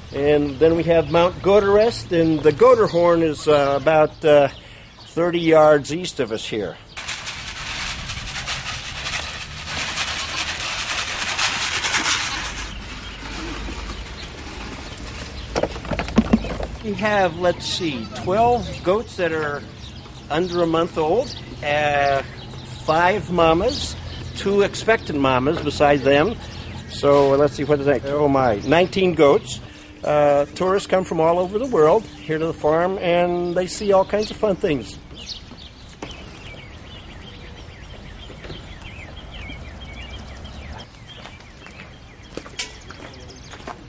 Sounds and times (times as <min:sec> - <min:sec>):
Speech: 0:00.2 - 0:06.8, 0:16.8 - 0:19.7, 0:20.3 - 0:35.0.